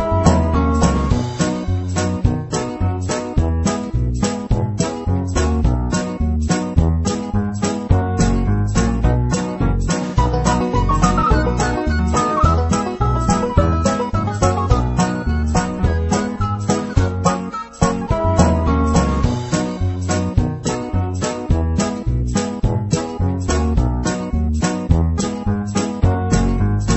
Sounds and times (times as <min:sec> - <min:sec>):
Music: 0:00.0 - 0:26.9.